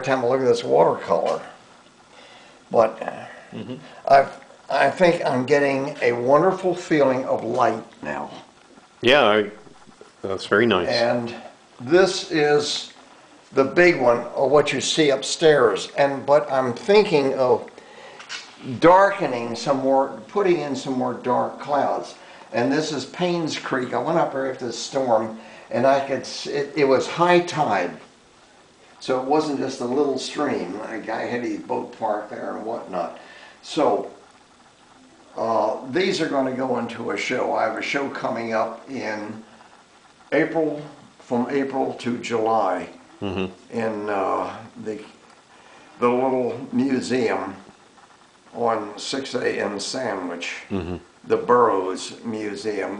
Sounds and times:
Speech: 0.0 - 1.6, 2.7 - 9.6, 10.2 - 17.7, 18.4 - 28.1, 29.0 - 34.2, 35.4 - 39.5, 40.3 - 45.2, 46.0 - 47.7, 48.5 - 52.9.

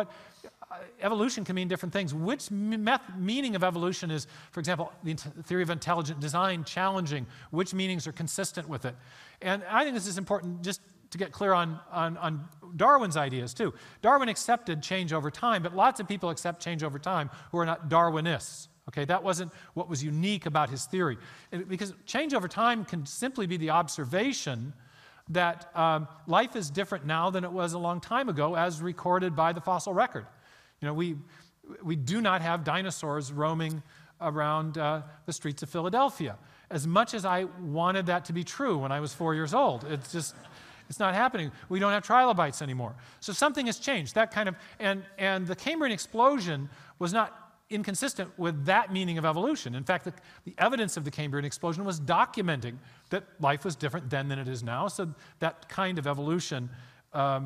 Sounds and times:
Speech: 0.0 - 57.4.

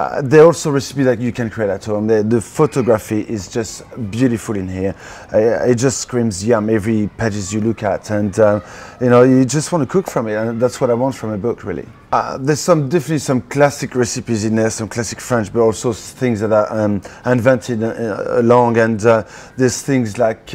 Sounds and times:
Speech: 0.0 - 20.5.

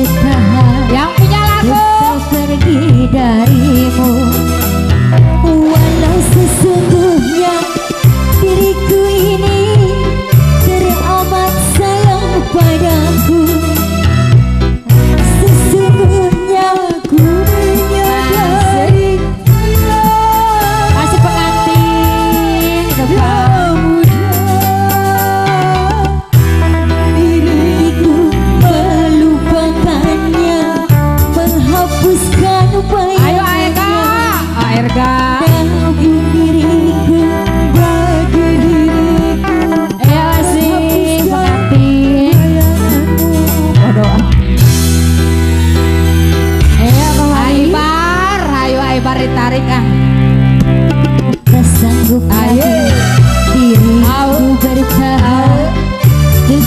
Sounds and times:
Wedding music: 0.0 - 56.6.

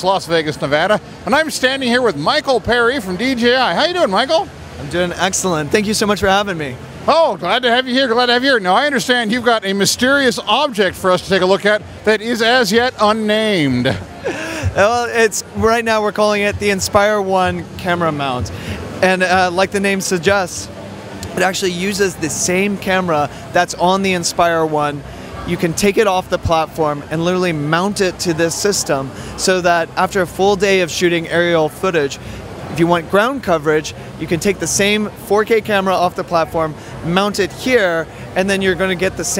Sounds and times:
Speech: 0.0 - 14.0, 14.6 - 39.3.

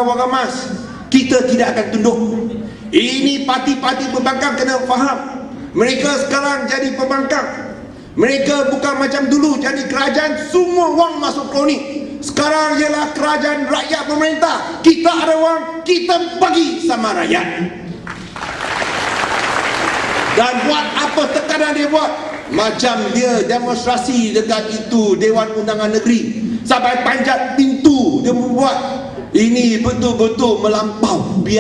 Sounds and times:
Male speech, man speaking: 0.0 - 17.8, 20.4 - 31.6
Narration, monologue: 0.0 - 18.1, 20.1 - 31.6.

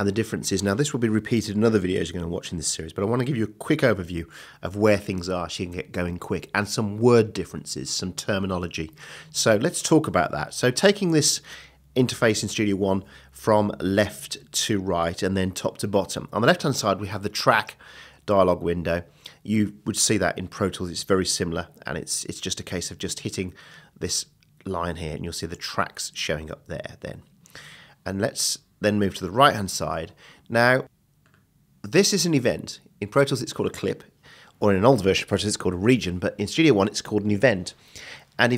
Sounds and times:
Speech: 0.0 - 27.3, 28.0 - 30.9, 31.8 - 37.8, 38.4 - 38.5.

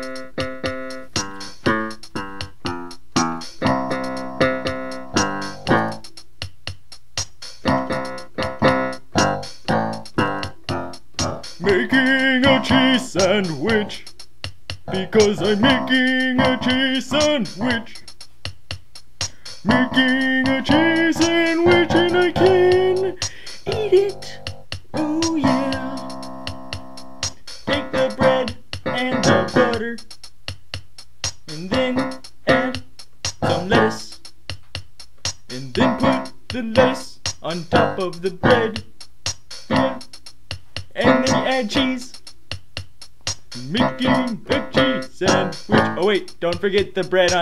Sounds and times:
Music: 0.0 - 47.4
Speech: 14.9 - 18.0, 21.1 - 24.4, 25.0 - 26.0, 28.1 - 30.0, 31.5 - 32.1, 33.4 - 34.2, 35.5 - 38.8, 41.0 - 42.1, 43.6 - 47.4.

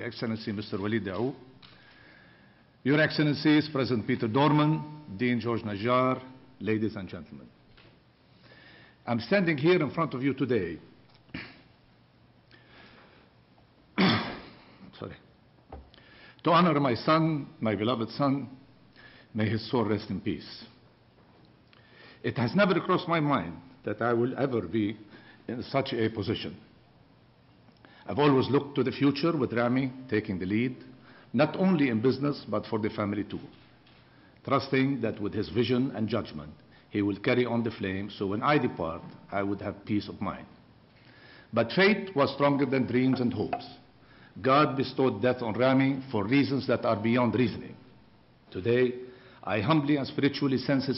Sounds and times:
Male speech, man speaking: 0.0 - 1.4, 2.9 - 7.5, 9.1 - 10.9, 15.0 - 15.3, 16.5 - 18.6, 19.4 - 20.8, 22.3 - 26.6, 28.1 - 30.8, 31.4 - 33.6, 34.5 - 40.5, 41.6 - 43.8, 44.4 - 47.8, 48.5 - 50.9
Narration, monologue: 0.0 - 50.9.

